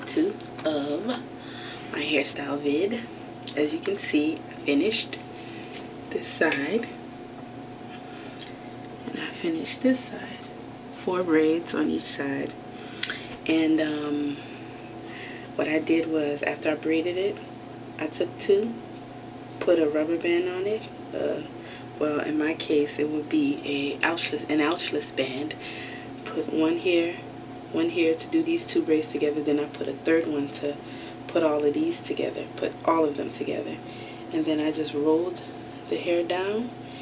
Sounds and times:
Speech: 0:00.0 - 0:01.2, 0:01.9 - 0:05.2, 0:06.1 - 0:07.0, 0:09.0 - 0:12.6, 0:13.4 - 0:14.4, 0:15.6 - 0:17.4, 0:18.0 - 0:18.8, 0:19.6 - 0:25.6, 0:26.2 - 0:36.7.

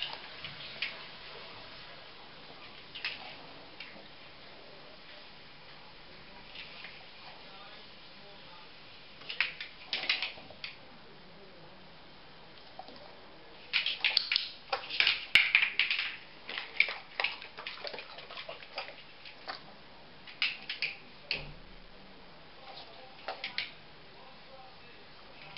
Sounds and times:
Speech: 0:06.1 - 0:09.6, 0:10.4 - 0:12.0, 0:21.1 - 0:25.5.

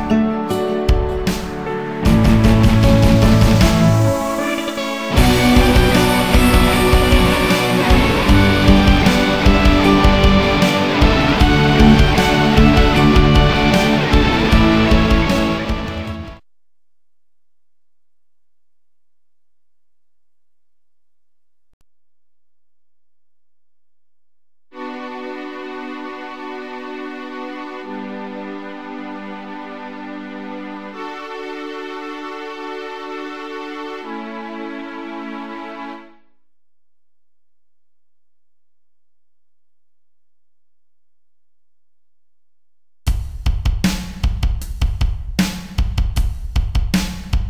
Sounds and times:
Music: 0:00.0 - 0:16.4, 0:24.8 - 0:36.4, 0:43.1 - 0:47.5.

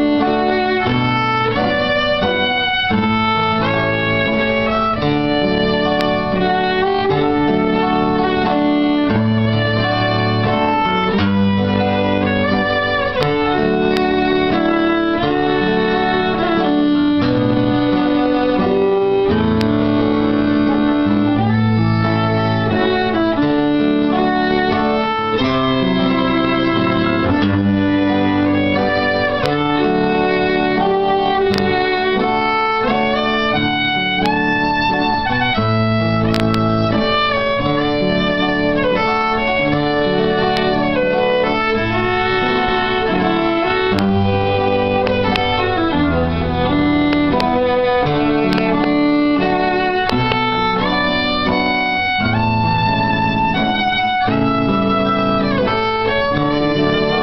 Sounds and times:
Pizzicato: 0:00.0 - 0:57.2.

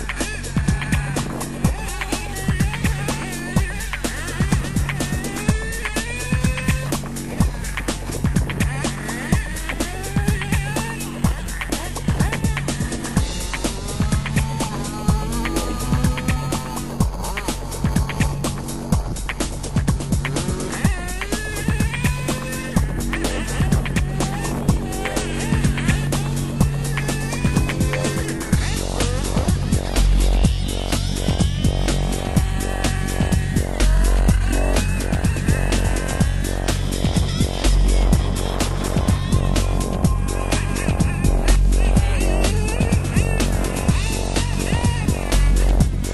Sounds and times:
Music: 0:00.0 - 0:46.1.

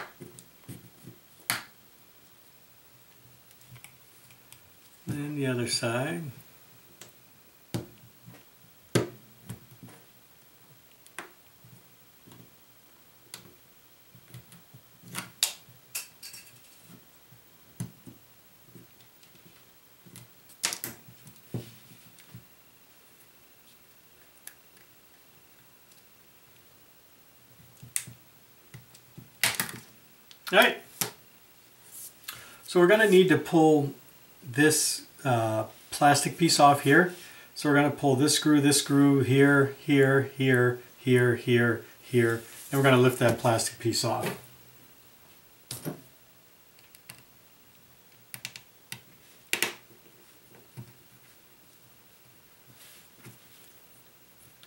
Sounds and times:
Inside, small room: 0:00.0 - 0:54.6
Speech: 0:05.1 - 0:06.4, 0:30.5 - 0:30.9, 0:32.7 - 0:44.4.

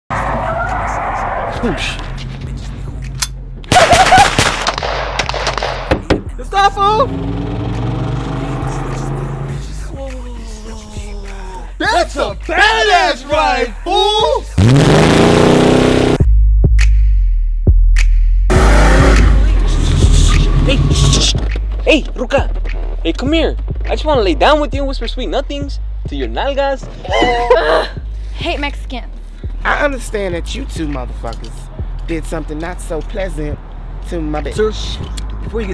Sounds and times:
Outside, urban or manmade: 0:00.1 - 0:35.7
Music: 0:01.6 - 0:15.3, 0:16.2 - 0:35.7.

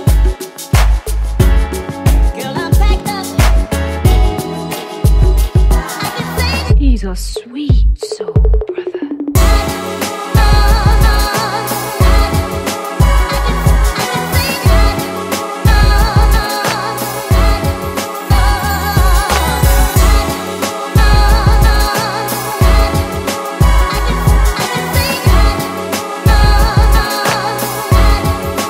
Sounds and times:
Electronic music: 0:00.0 - 0:06.8, 0:08.7 - 0:28.6
Funk: 0:00.0 - 0:07.3.

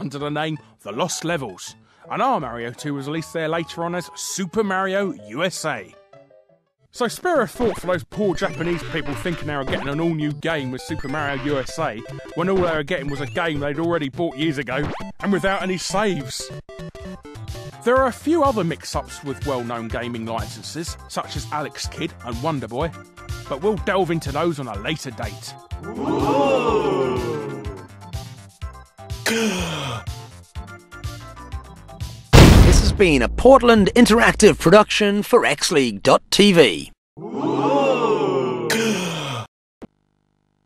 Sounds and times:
Speech: 0:00.0 - 0:05.9, 0:07.0 - 0:16.5, 0:17.8 - 0:22.9, 0:23.5 - 0:26.5, 0:32.7 - 0:38.9
Music: 0:00.0 - 0:32.4.

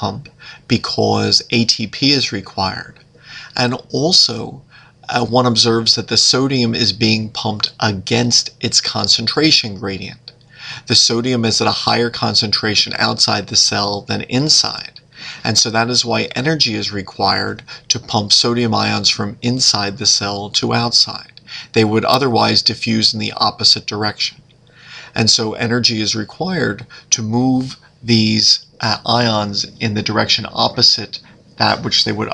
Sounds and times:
Speech: 0:00.0 - 0:32.3.

